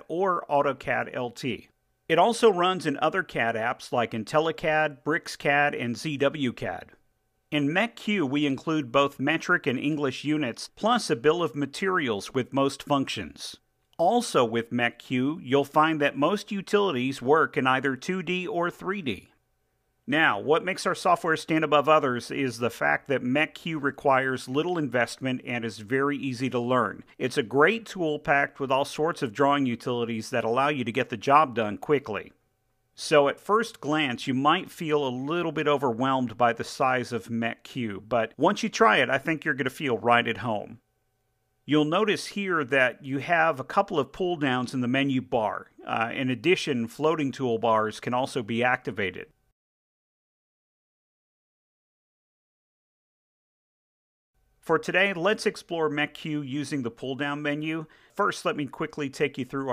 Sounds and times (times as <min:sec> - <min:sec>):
Speech: 0:00.0 - 0:19.4, 0:20.1 - 0:32.4, 0:33.0 - 0:40.8, 0:41.7 - 0:49.4, 0:54.6 - 0:59.7.